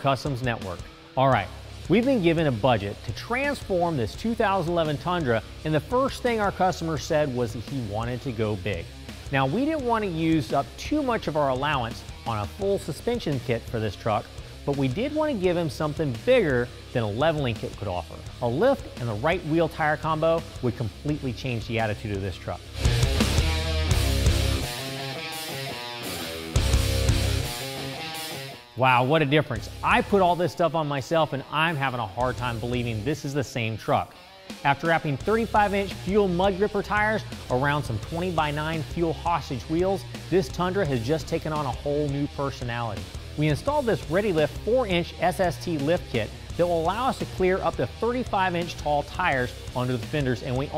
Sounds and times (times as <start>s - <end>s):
Speech: 0.0s - 22.7s, 28.8s - 50.7s
Music: 0.0s - 50.7s.